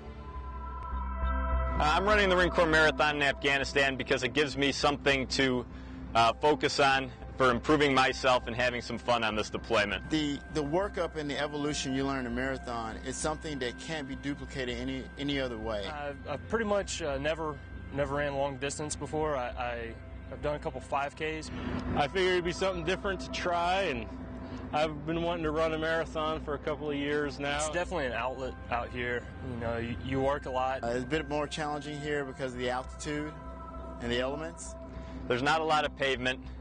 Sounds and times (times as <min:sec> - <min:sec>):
Male speech, man speaking: 0:01.8 - 0:05.6, 0:06.2 - 0:24.1, 0:24.8 - 0:33.4, 0:34.0 - 0:34.7, 0:35.3 - 0:36.5.